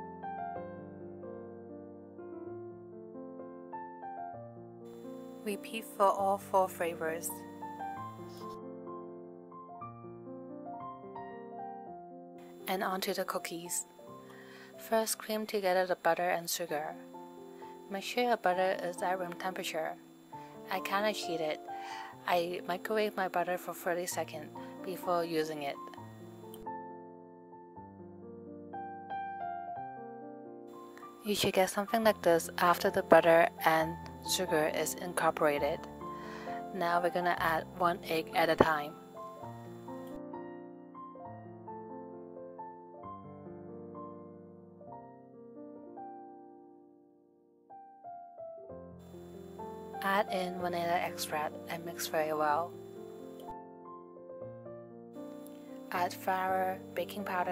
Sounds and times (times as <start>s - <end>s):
Music: 0.0s - 57.5s
Speech: 5.5s - 7.4s, 12.7s - 13.8s, 14.8s - 17.0s, 17.9s - 20.0s, 20.7s - 21.6s, 22.2s - 25.8s, 31.2s - 35.8s, 36.7s - 39.0s, 50.0s - 52.7s, 55.9s - 57.5s.